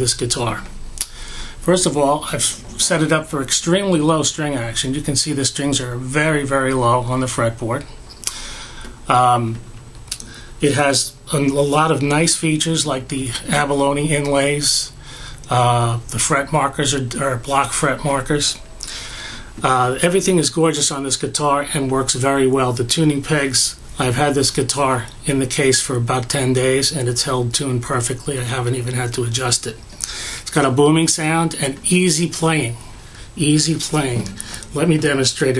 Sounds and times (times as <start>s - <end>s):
Speech: 0.0s - 0.8s, 1.6s - 8.0s, 9.1s - 9.6s, 10.6s - 18.7s, 19.6s - 29.8s, 30.5s - 35.5s.